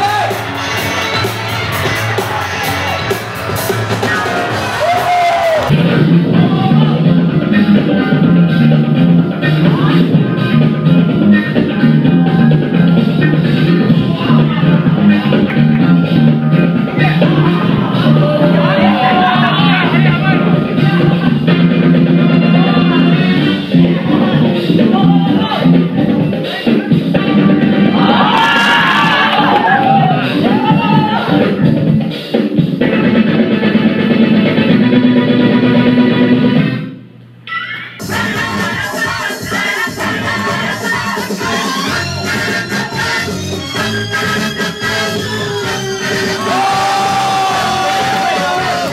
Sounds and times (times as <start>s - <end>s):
Music: 0.0s - 48.9s.